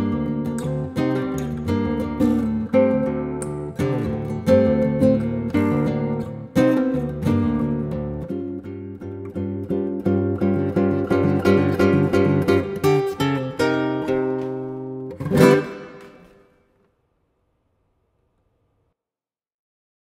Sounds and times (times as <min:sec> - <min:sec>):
Guitar: 0:00.0 - 0:17.3.